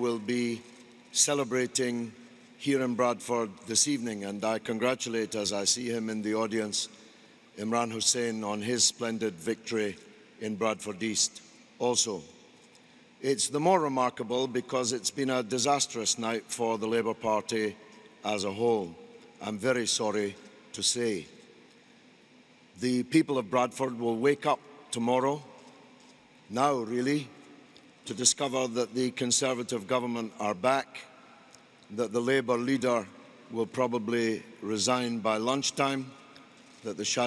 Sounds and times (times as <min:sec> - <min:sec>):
Male speech, man speaking: 0:00.0 - 0:07.0, 0:07.6 - 0:12.3, 0:13.2 - 0:21.3, 0:22.8 - 0:25.5, 0:26.5 - 0:27.3, 0:28.0 - 0:31.1, 0:31.9 - 0:36.2, 0:36.8 - 0:37.2
Narration, monologue: 0:00.0 - 0:37.2.